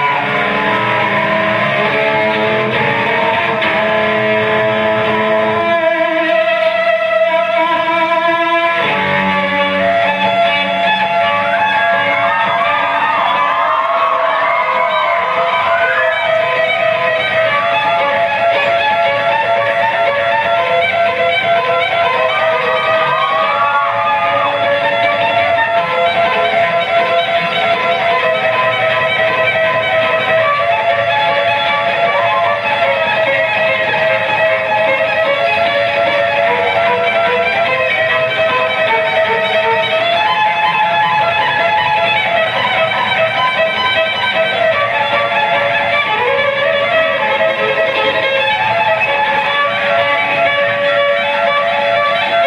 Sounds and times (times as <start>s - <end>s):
Violin, fiddle: 0.0s - 52.4s.